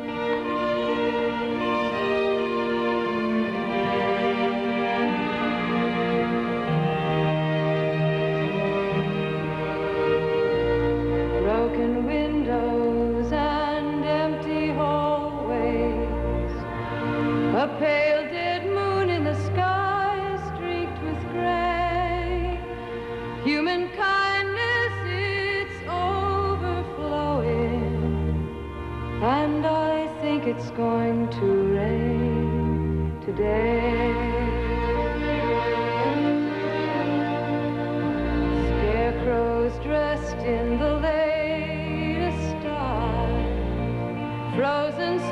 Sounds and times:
Music: 0.0s - 45.3s.

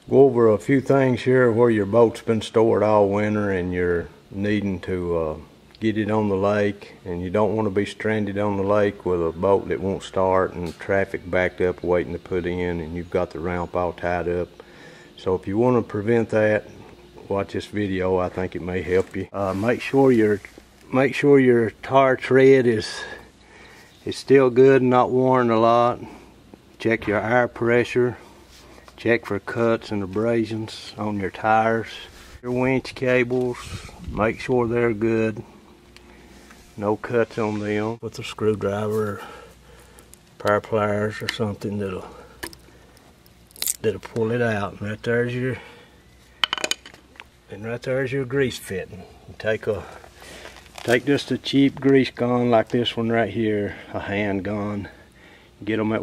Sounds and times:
Speech: 0.0s - 14.6s, 15.2s - 23.3s, 24.0s - 26.2s, 26.8s - 28.2s, 29.0s - 35.5s, 36.8s - 39.5s, 40.4s - 42.3s, 43.8s - 45.7s, 47.5s - 50.0s, 50.8s - 55.0s, 55.6s - 56.0s.

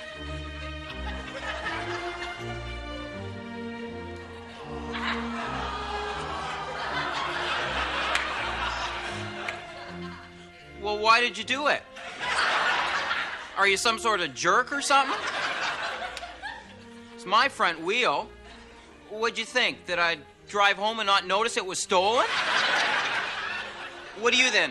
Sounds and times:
Music: 0.0s - 24.7s
Speech: 10.8s - 11.8s, 13.6s - 15.2s, 17.2s - 18.3s, 19.1s - 22.3s, 24.2s - 24.7s.

